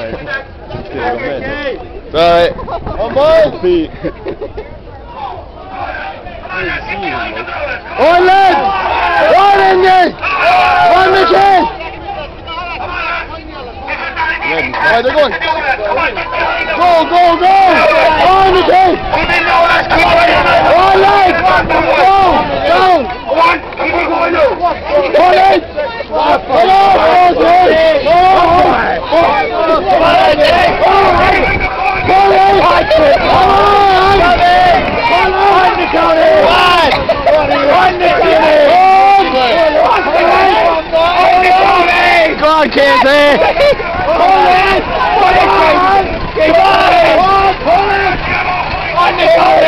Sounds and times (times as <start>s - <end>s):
Speech: 4.6s - 49.6s.